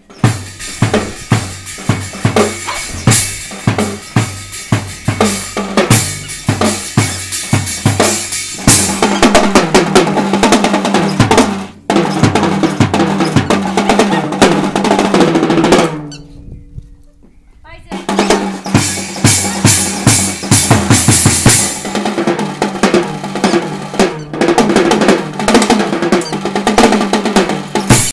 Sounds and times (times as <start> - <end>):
Drum roll: 0.0 - 16.2, 17.8 - 28.1
Drum kit: 0.0 - 16.3, 17.7 - 28.1
Bass drum: 0.0 - 16.8, 17.8 - 28.1.